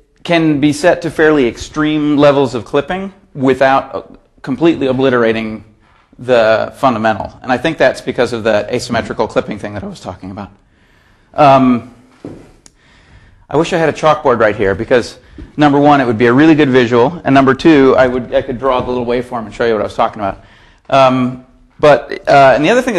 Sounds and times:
Speech: 0.2 - 10.6, 11.4 - 12.0, 13.5 - 22.9.

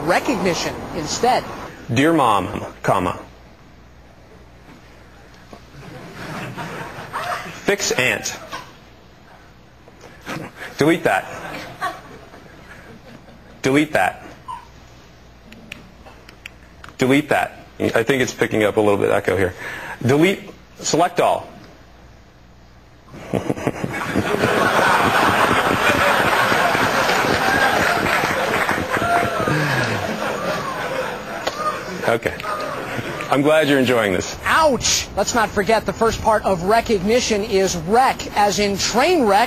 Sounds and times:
Male speech, man speaking: 1.9 - 3.3, 7.6 - 8.5, 10.8 - 11.3, 13.6 - 14.3, 17.0 - 21.6, 32.1 - 32.4, 33.3 - 36.8.

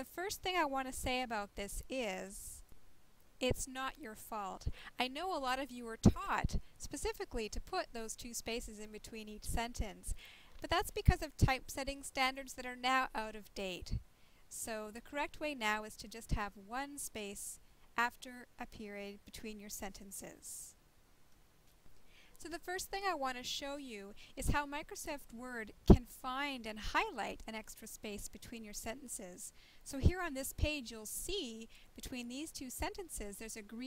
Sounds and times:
Speech: 0.0 - 2.6, 3.4 - 20.8, 22.4 - 33.8.

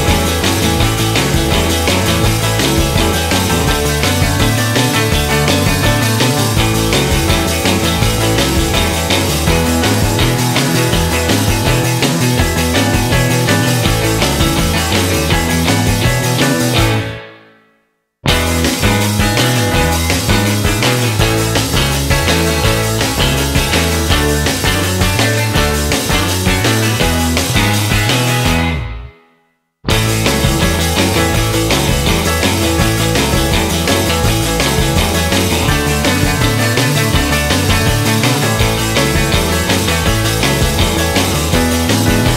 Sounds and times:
Exciting music: 0.0 - 17.2, 18.3 - 29.1, 29.9 - 42.3
Punk rock: 0.0 - 17.4, 18.3 - 29.0, 29.9 - 42.3
Happy music: 0.0 - 17.6, 18.3 - 29.3, 29.9 - 42.3
Progressive rock: 0.0 - 17.6, 18.3 - 29.2, 29.9 - 42.3.

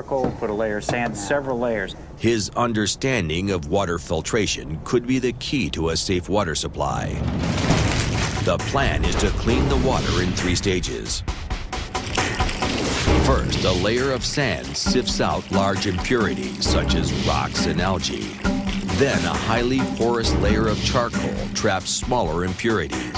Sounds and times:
Speech: 0.0 - 7.2, 8.4 - 11.2, 13.2 - 18.3, 18.9 - 23.1
Music: 7.0 - 23.1.

